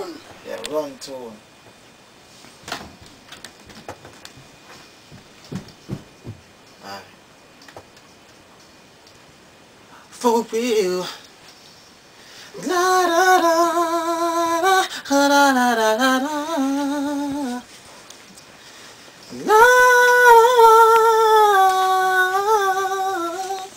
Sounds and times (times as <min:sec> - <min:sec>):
Speech: 0:00.0 - 0:01.4.